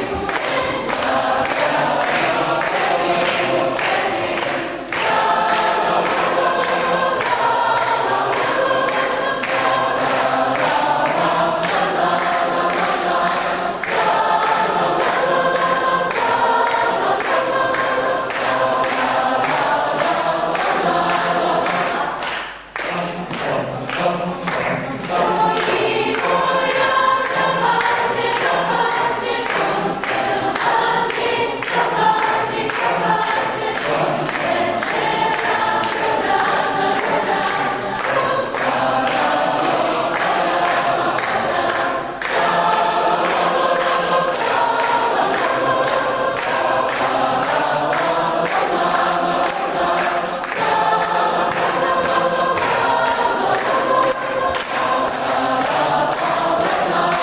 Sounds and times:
Choir: 0.0 - 57.2.

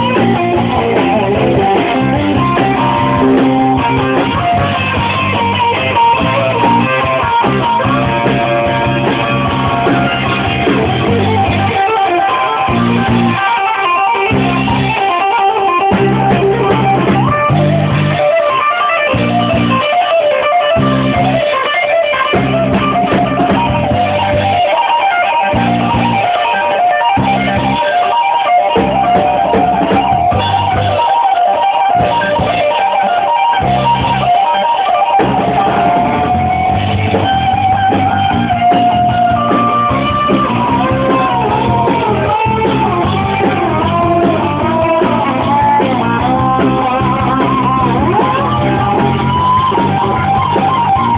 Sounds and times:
Blues: 0.0 - 51.1.

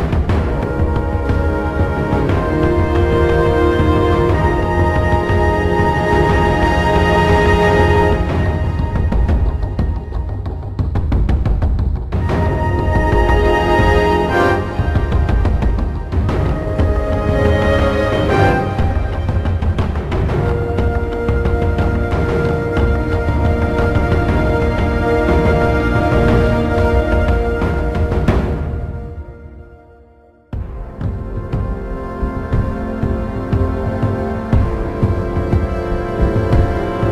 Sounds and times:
New-age music: 0.0 - 37.1.

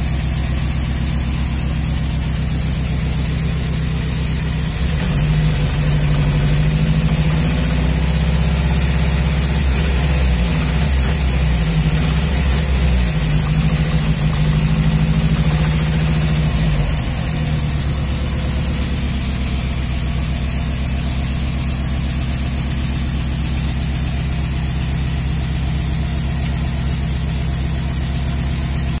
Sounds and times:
Idling: 0.0 - 29.0
Medium engine (mid frequency): 0.0 - 29.0
Vehicle: 0.0 - 29.0.

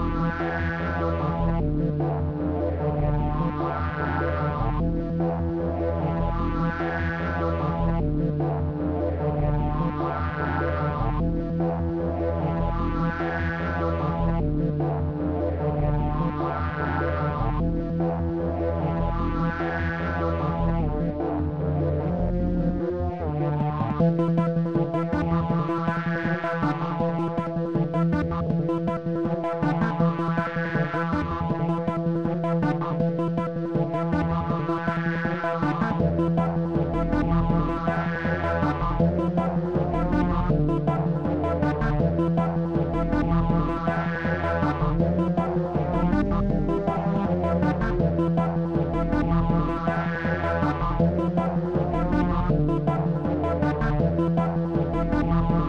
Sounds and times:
Music: 0.0 - 55.6.

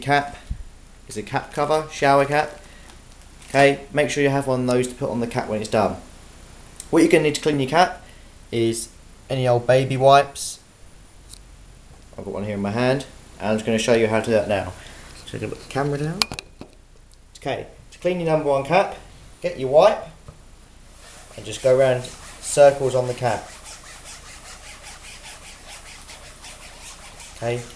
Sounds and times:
Speech: 0.0 - 0.4, 1.1 - 2.6, 3.5 - 6.1, 6.8 - 10.6, 12.2 - 16.2, 17.4 - 20.2, 21.4 - 23.5, 27.4 - 27.7.

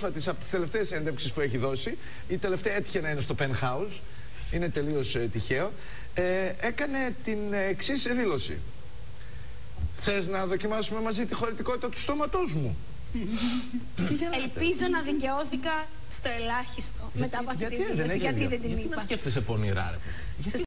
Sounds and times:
Speech: 16.4 - 20.6.

